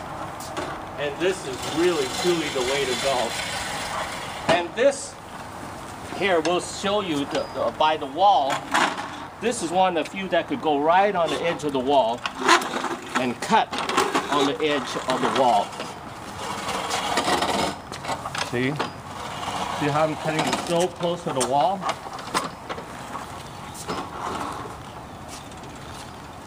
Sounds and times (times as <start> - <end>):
Speech: 1.0 - 3.4, 4.5 - 5.2, 6.1 - 8.6, 9.4 - 12.2, 13.2 - 15.8, 18.5 - 18.9, 19.8 - 21.9.